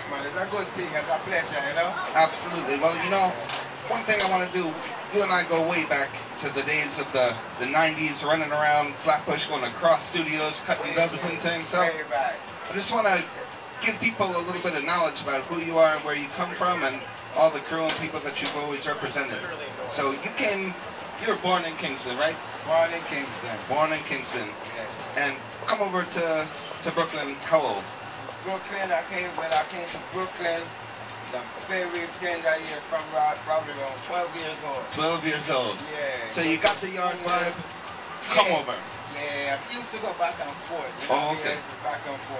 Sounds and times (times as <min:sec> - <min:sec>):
Speech: 0:00.0 - 0:30.7, 0:31.3 - 0:42.4
Hubbub, speech noise, speech babble: 0:00.0 - 0:42.4.